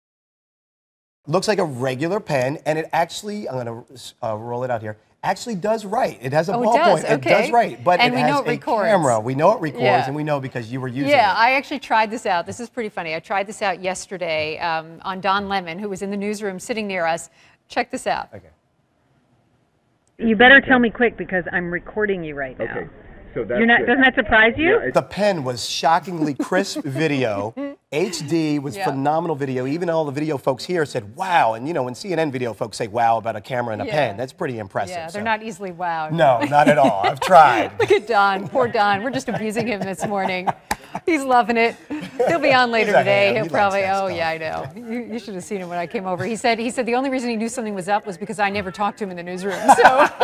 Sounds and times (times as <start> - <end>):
Speech: 1.3 - 11.4, 25.0 - 40.4, 42.2 - 46.6.